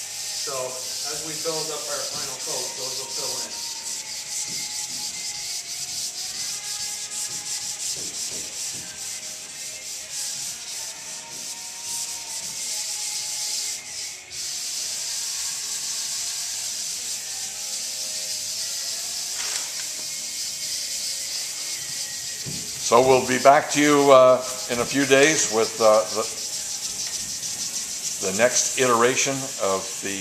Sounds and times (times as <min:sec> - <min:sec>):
Rub: 0:00.0 - 0:30.2
Sanding: 0:00.0 - 0:30.2.